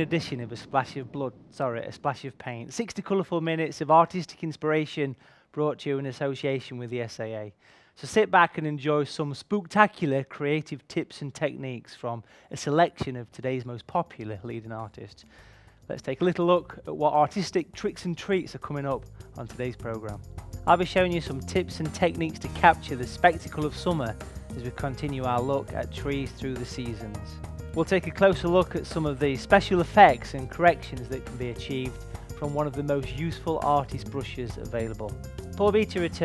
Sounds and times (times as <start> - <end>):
Speech: 0.0 - 15.3, 15.9 - 36.2
Music: 13.9 - 36.2.